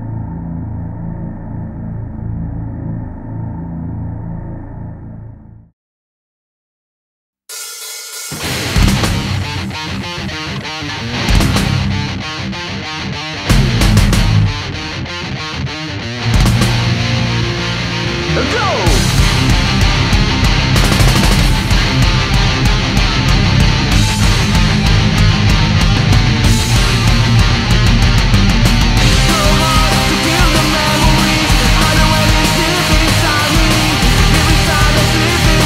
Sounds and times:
Music: 0:07.5 - 0:35.6.

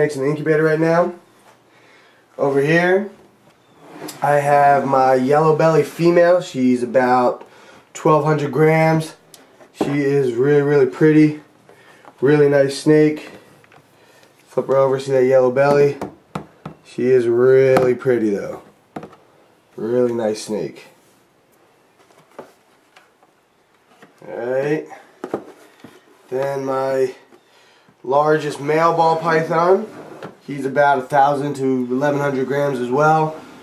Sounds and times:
Speech: 0:00.0 - 0:01.2, 0:02.4 - 0:03.2, 0:04.1 - 0:07.4, 0:08.0 - 0:09.2, 0:09.8 - 0:11.5, 0:12.2 - 0:13.4, 0:14.5 - 0:16.0, 0:16.9 - 0:18.7, 0:19.8 - 0:21.0, 0:24.2 - 0:25.1, 0:26.3 - 0:27.3, 0:28.0 - 0:33.4
Inside, small room: 0:00.0 - 0:33.6.

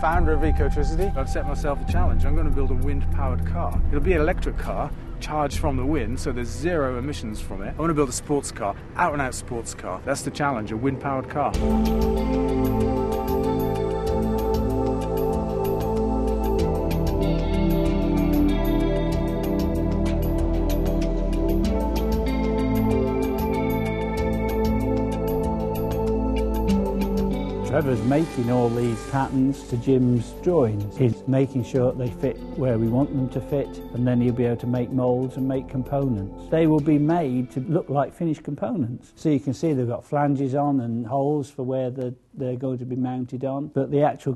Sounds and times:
Speech: 0:00.0 - 0:11.6, 0:27.7 - 0:44.3
Music: 0:00.0 - 0:40.0.

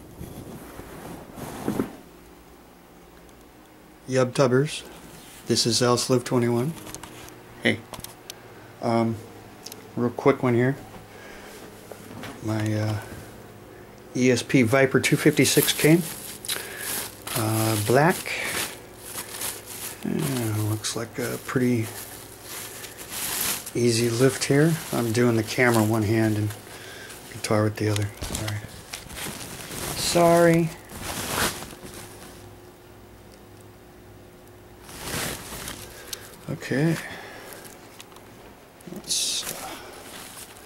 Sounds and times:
Speech: 0:04.0 - 0:04.9, 0:05.5 - 0:06.8, 0:07.6 - 0:07.8, 0:08.8 - 0:09.2, 0:10.0 - 0:10.8, 0:12.4 - 0:13.1, 0:14.1 - 0:16.1, 0:17.3 - 0:18.6, 0:20.0 - 0:22.0, 0:23.8 - 0:26.6, 0:27.3 - 0:28.7, 0:30.0 - 0:30.8, 0:36.5 - 0:37.1, 0:38.9 - 0:39.7.

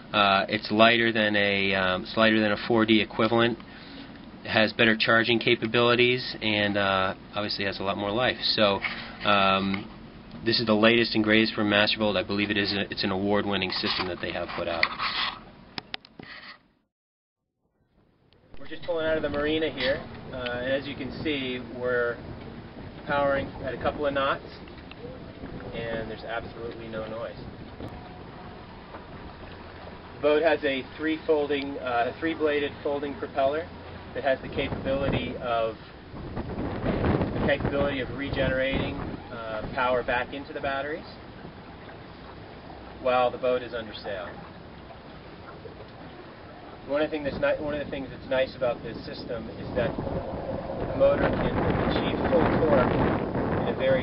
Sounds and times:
Speech: 0:00.1 - 0:03.6, 0:04.5 - 0:14.9, 0:18.6 - 0:22.2, 0:23.0 - 0:24.6, 0:25.7 - 0:27.4, 0:30.2 - 0:35.8, 0:37.4 - 0:41.2, 0:43.0 - 0:44.4, 0:46.9 - 0:50.0, 0:50.9 - 0:53.0, 0:53.6 - 0:54.0.

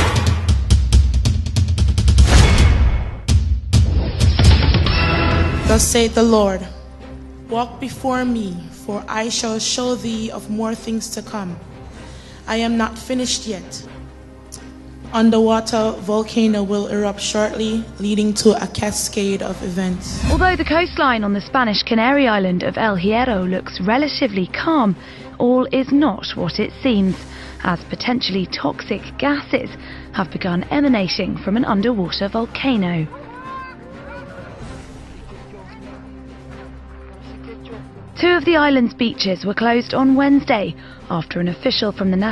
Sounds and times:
Music: 0:00.0 - 0:42.3
Speech: 0:07.5 - 0:11.6, 0:15.1 - 0:34.3, 0:37.4 - 0:42.3.

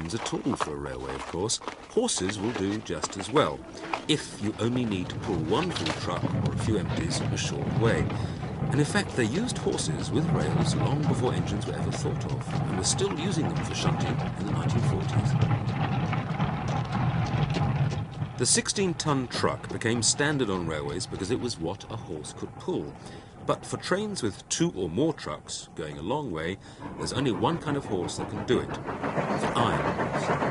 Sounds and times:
Speech: 0:00.0 - 0:15.5, 0:18.4 - 0:30.5.

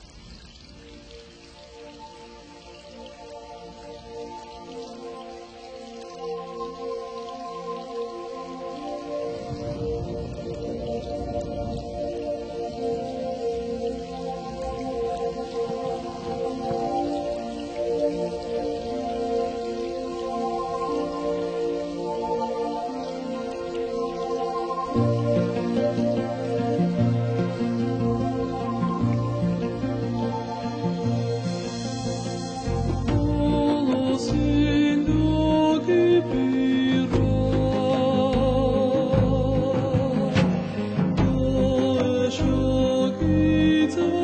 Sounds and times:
Soul music: 0:00.9 - 0:44.2.

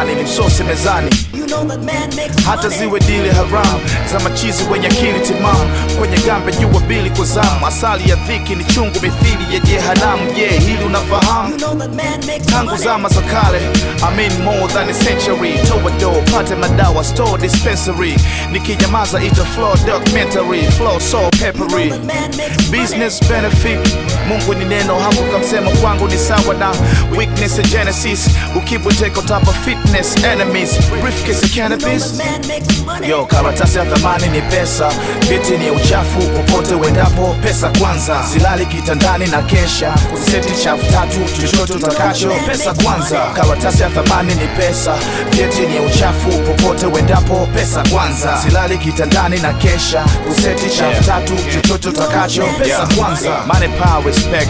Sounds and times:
Funk: 0:00.0 - 0:54.5.

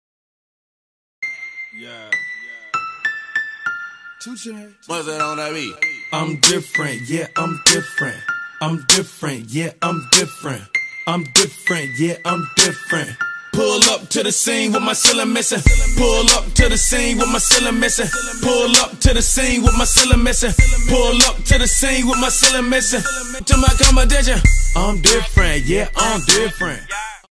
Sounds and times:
Music: 0:01.2 - 0:27.3.

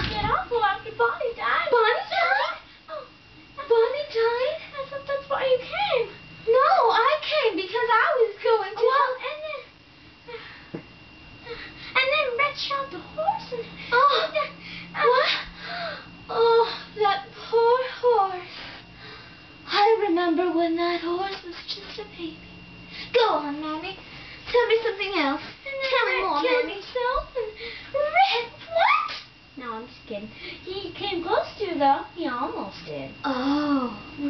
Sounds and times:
Speech: 0:23.2 - 0:27.4.

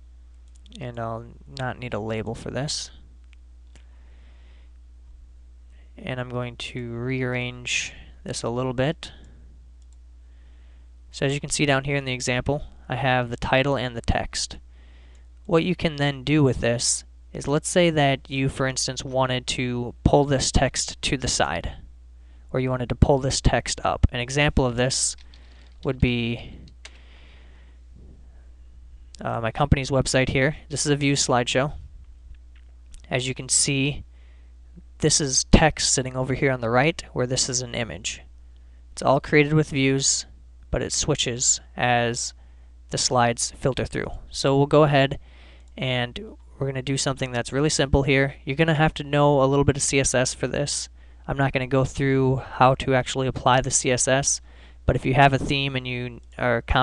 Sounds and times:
Speech: 0:00.7 - 0:03.1, 0:06.0 - 0:09.3, 0:11.1 - 0:14.6, 0:15.5 - 0:21.9, 0:22.5 - 0:25.2, 0:25.8 - 0:26.6, 0:29.2 - 0:31.8, 0:33.0 - 0:34.1, 0:34.8 - 0:38.3, 0:39.0 - 0:45.2, 0:45.8 - 0:56.8.

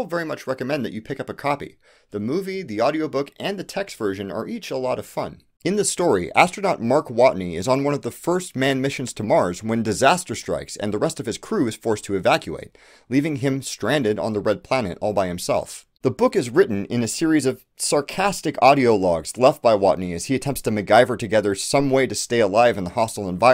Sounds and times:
Speech: 0:00.0 - 0:23.5.

